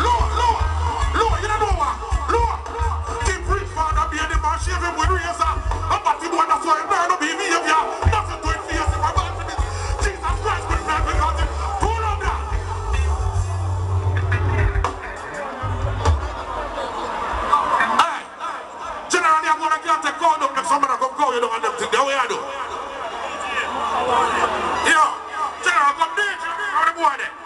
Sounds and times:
Speech: 0:00.0 - 0:12.6, 0:16.6 - 0:27.4
Music: 0:00.0 - 0:17.5.

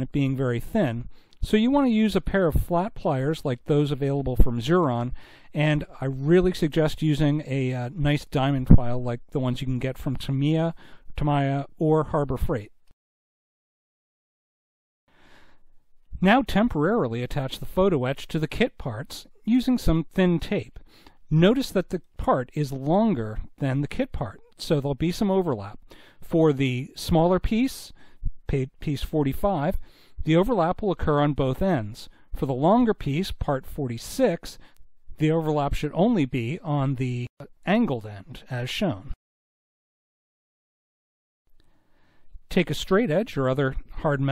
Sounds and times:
Speech: 0:00.0 - 0:12.8, 0:16.1 - 0:34.6, 0:35.2 - 0:39.2, 0:42.5 - 0:44.3.

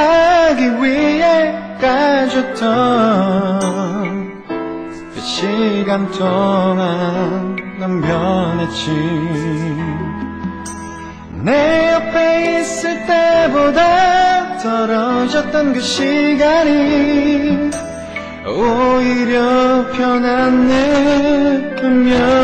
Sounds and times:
Male singing: 0:00.0 - 0:04.4, 0:05.0 - 0:10.6, 0:11.4 - 0:17.8, 0:18.4 - 0:22.4
Music: 0:00.0 - 0:22.4.

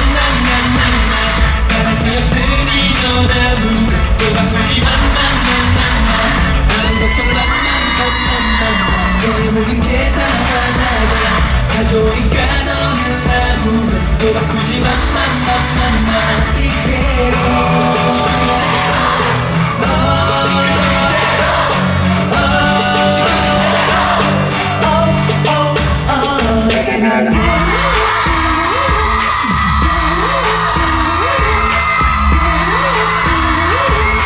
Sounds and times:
Singing: 0:00.0 - 0:34.2.

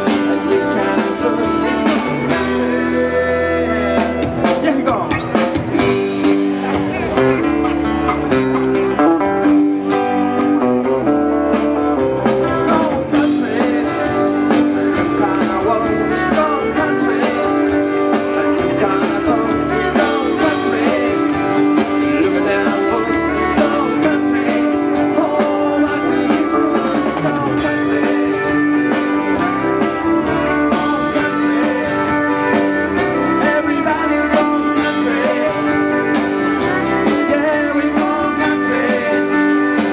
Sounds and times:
Blues: 0:00.0 - 0:39.9
Country: 0:00.0 - 0:39.9.

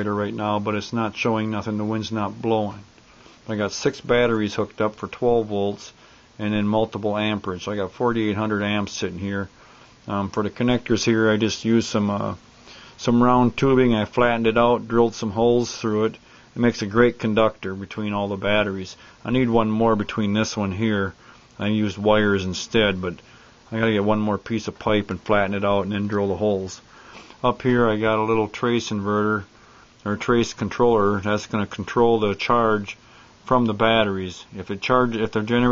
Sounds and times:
Speech: 0:00.0 - 0:02.9, 0:03.5 - 0:12.4, 0:13.0 - 0:35.7.

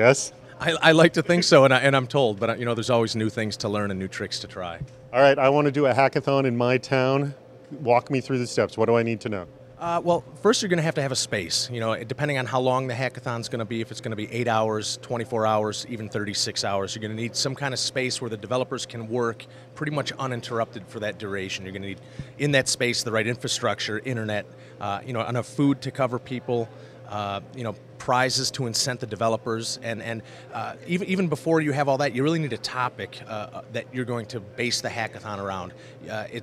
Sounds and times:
Speech: 0:00.0 - 0:36.4.

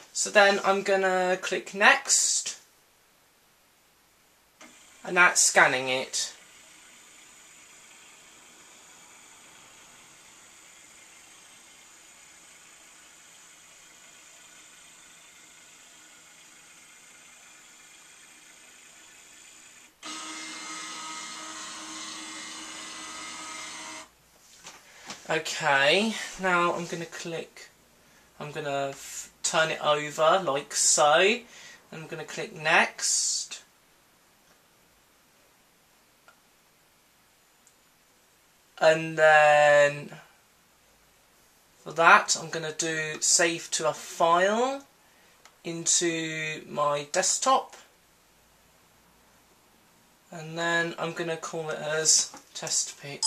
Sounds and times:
Printer: 0:06.4 - 0:24.1.

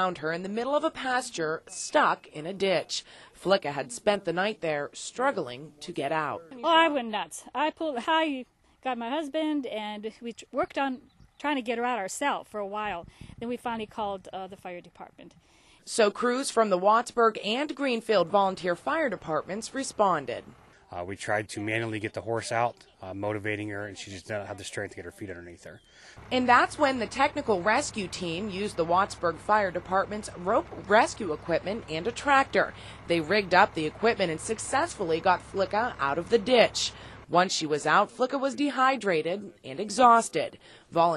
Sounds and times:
Speech: 0:00.0 - 0:15.3, 0:15.9 - 0:41.1.

